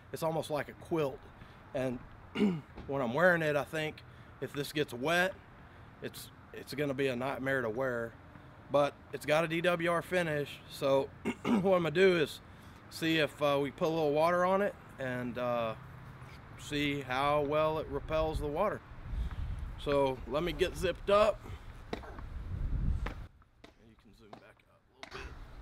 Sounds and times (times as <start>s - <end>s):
Speech: 0.1s - 1.2s, 1.8s - 2.0s, 2.9s - 5.4s, 6.0s - 15.8s, 16.6s - 18.8s, 19.8s - 21.4s, 23.8s - 25.3s.